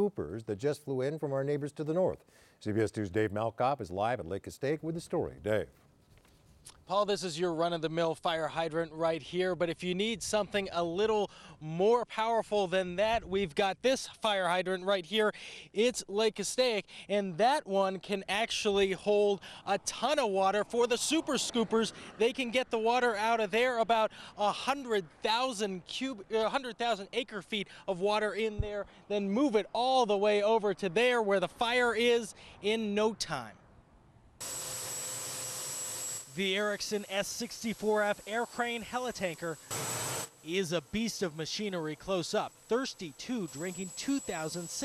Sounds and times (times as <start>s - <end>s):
Speech: 0.0s - 5.8s, 6.9s - 33.6s, 36.4s - 39.6s, 40.5s - 44.8s.